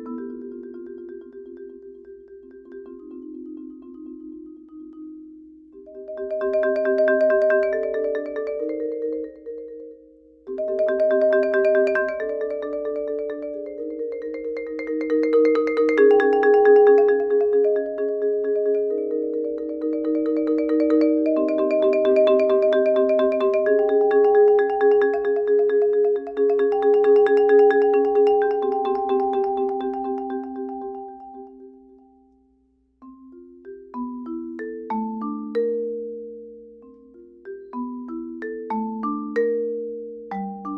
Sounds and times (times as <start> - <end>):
Marimba, xylophone: 0.0 - 32.4, 33.0 - 40.7.